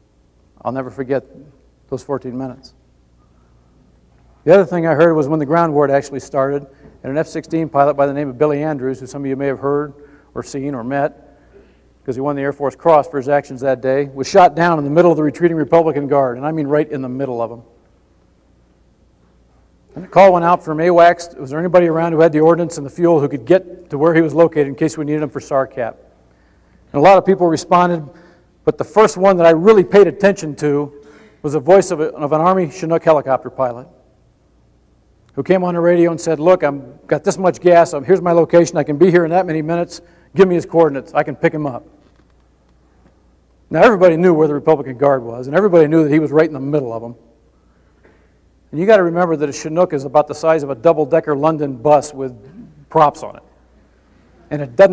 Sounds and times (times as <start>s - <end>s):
Narration, monologue: 0.0s - 54.9s
Male speech, man speaking: 0.6s - 2.8s, 4.5s - 11.2s, 12.1s - 17.6s, 20.0s - 26.0s, 27.0s - 28.1s, 28.7s - 33.9s, 35.4s - 41.9s, 43.7s - 47.2s, 48.7s - 53.5s, 54.5s - 54.9s.